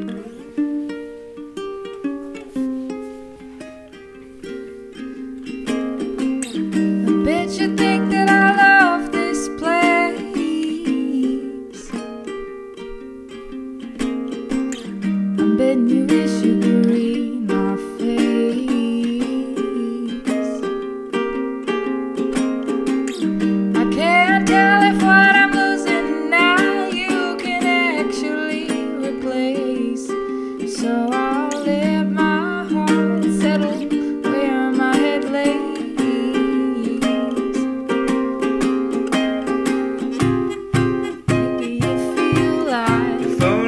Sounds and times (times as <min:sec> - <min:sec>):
Ukulele: 0:00.0 - 0:43.6.